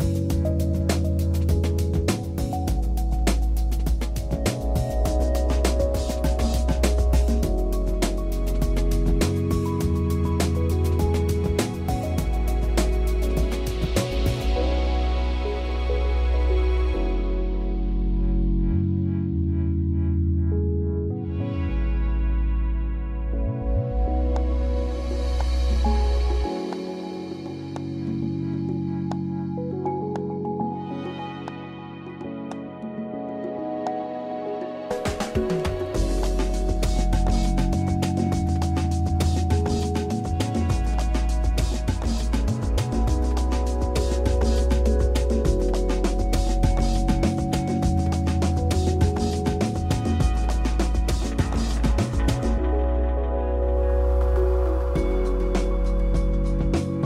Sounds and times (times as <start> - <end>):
Music: 0.0 - 57.0.